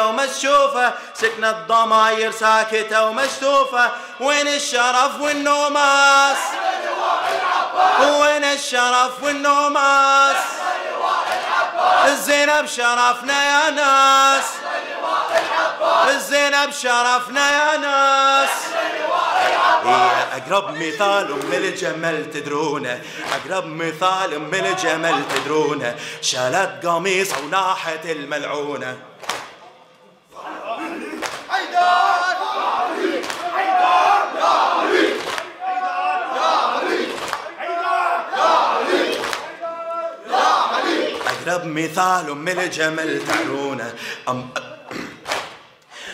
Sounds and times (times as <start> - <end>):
Singing: 0.0 - 44.8
Inside, large room or hall: 0.0 - 46.1.